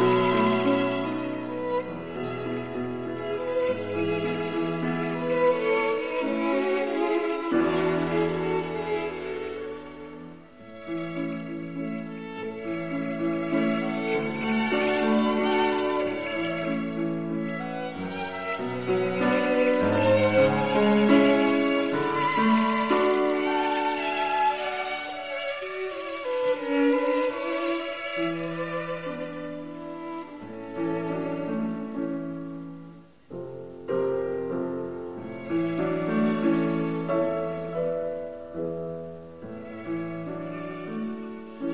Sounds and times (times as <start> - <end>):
Violin, fiddle: 0.0 - 41.7.